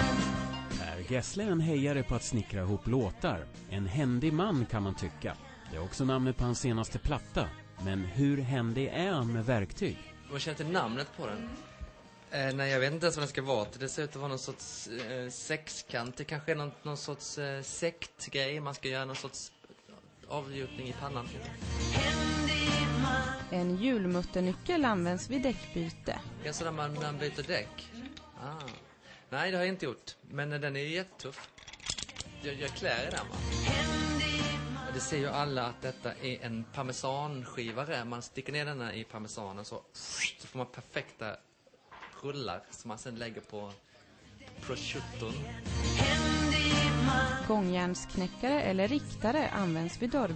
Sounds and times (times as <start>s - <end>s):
Music: 0.0s - 29.8s, 31.4s - 38.0s, 43.6s - 50.3s
Speech: 23.6s - 28.8s
Tools: 31.3s - 32.3s.